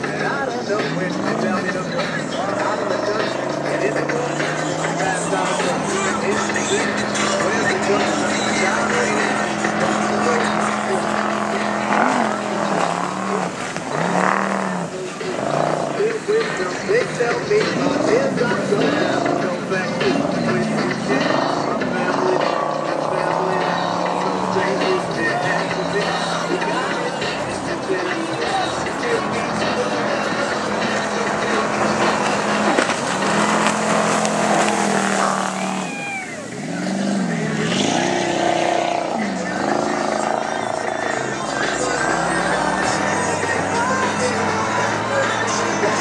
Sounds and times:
Speech: 0:00.0 - 0:13.5, 0:35.8 - 0:46.0
Motorboat, speedboat: 0:00.0 - 0:46.0
Music: 0:00.0 - 0:46.0.

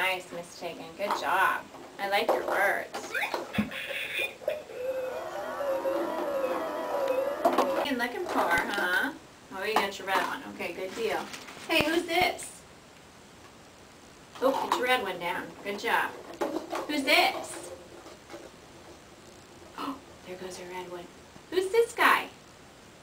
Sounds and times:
Female speech, woman speaking: 0:00.0 - 0:03.1, 0:07.8 - 0:12.6, 0:14.4 - 0:16.2, 0:16.9 - 0:17.7, 0:19.8 - 0:22.4.

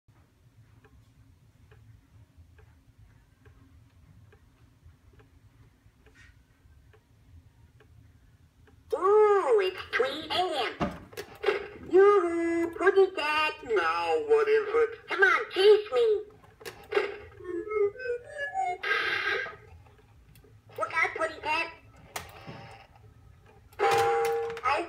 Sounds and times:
Speech: 0:08.9 - 0:10.8, 0:11.9 - 0:16.3, 0:20.8 - 0:21.8, 0:24.6 - 0:24.8.

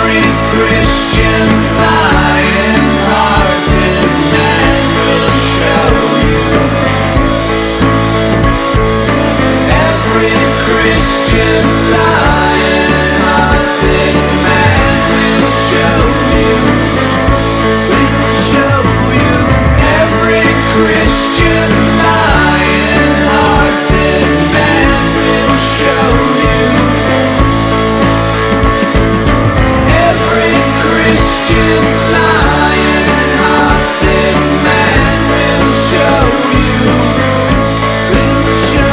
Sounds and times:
Grunge: 0:00.0 - 0:38.9.

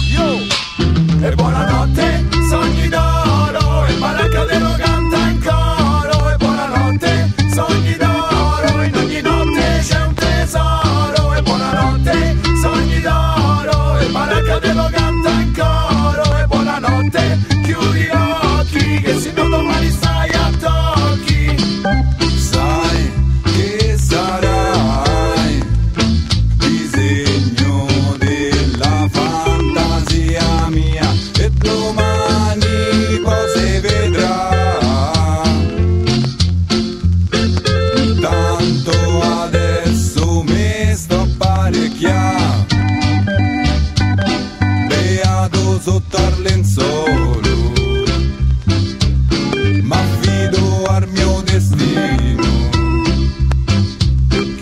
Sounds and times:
Music: 0:00.0 - 0:54.6.

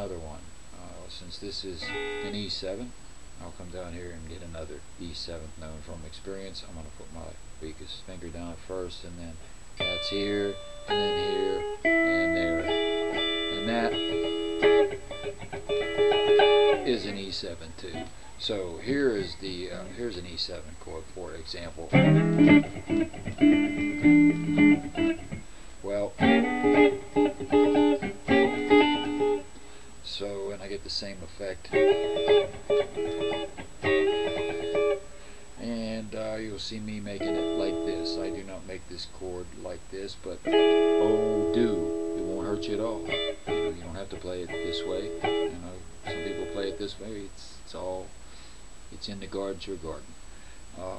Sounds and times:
Speech: 0:00.0 - 0:12.8, 0:13.5 - 0:14.1, 0:16.8 - 0:22.0, 0:25.8 - 0:26.3, 0:30.0 - 0:31.8, 0:35.6 - 0:43.1, 0:43.7 - 0:48.1, 0:48.9 - 0:50.1, 0:50.8 - 0:50.9
Electric guitar: 0:01.8 - 0:02.5, 0:09.8 - 0:17.2, 0:21.9 - 0:29.9, 0:31.7 - 0:35.6, 0:37.1 - 0:38.6, 0:40.4 - 0:47.1.

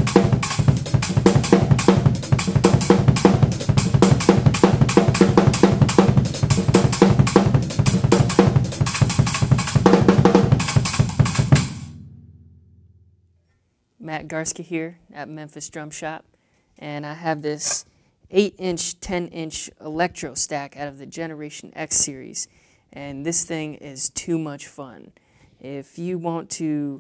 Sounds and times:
Drum roll: 0:00.0 - 0:13.3
Speech: 0:14.0 - 0:27.0.

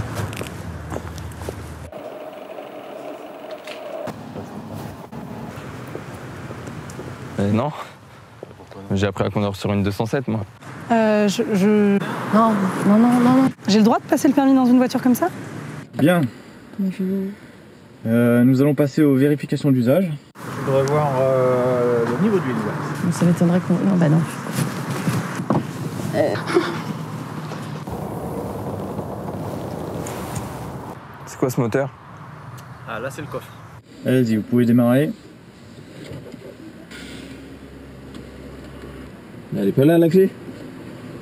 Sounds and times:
Car: 0:00.0 - 0:07.6, 0:10.6 - 0:16.3, 0:20.4 - 0:33.8, 0:35.1 - 0:41.2.

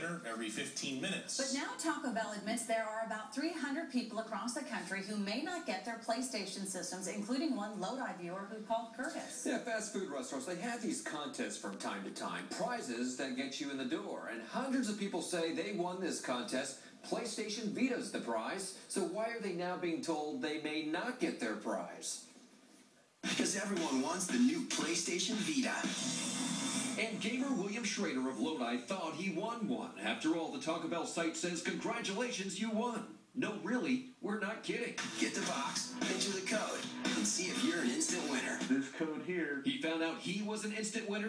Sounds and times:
Speech: 0:00.0 - 0:22.3, 0:23.3 - 0:25.9, 0:27.0 - 0:35.5, 0:37.4 - 0:41.2.

